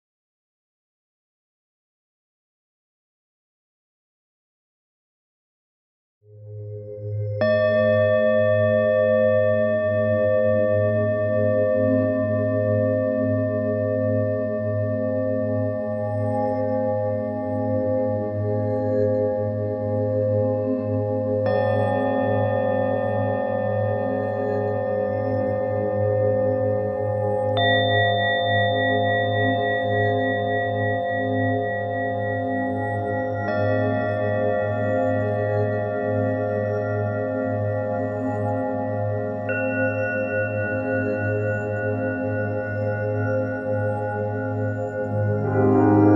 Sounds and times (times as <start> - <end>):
Singing bowl: 7.0 - 46.1.